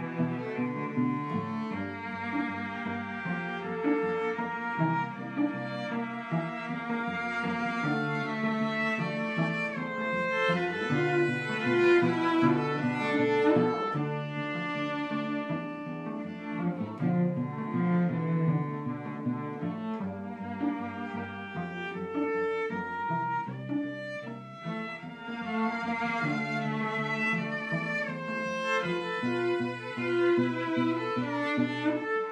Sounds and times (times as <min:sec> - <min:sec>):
Cello: 0:00.0 - 0:32.3
Double bass: 0:00.0 - 0:32.3.